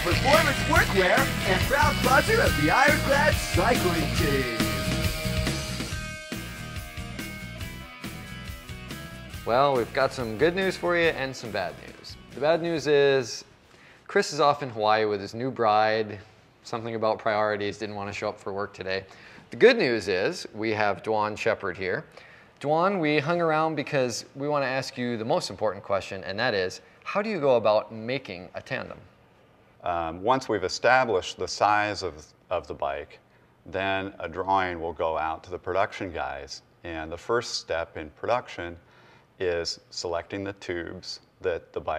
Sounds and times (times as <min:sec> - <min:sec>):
Speech: 0:00.0 - 0:04.7, 0:09.5 - 0:13.5, 0:14.1 - 0:29.1, 0:29.8 - 0:38.8, 0:39.4 - 0:41.9.